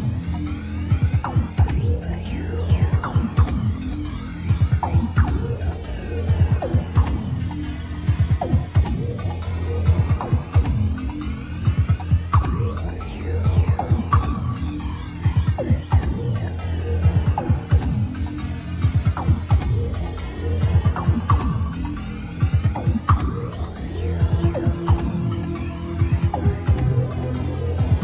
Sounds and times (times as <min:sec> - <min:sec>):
Music: 0:00.0 - 0:28.0.